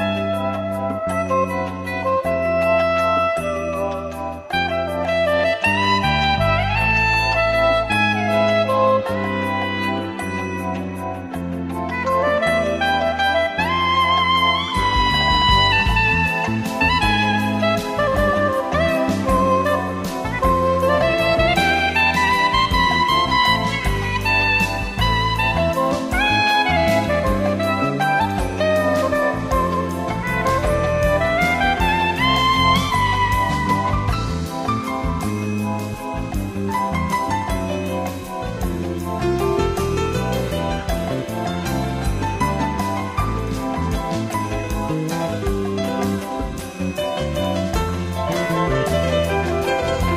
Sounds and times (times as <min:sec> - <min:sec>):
Music: 0:00.0 - 0:50.1.